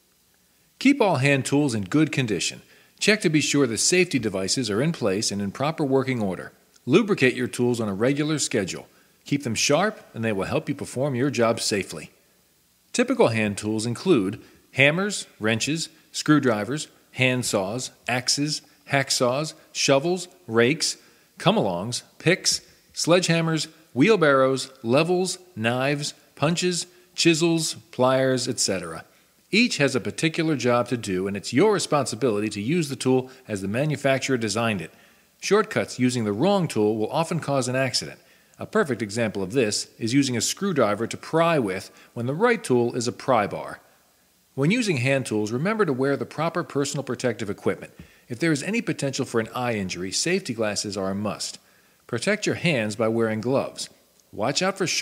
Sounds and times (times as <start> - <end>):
Speech: 0.8 - 12.2, 12.9 - 43.9, 44.6 - 55.0.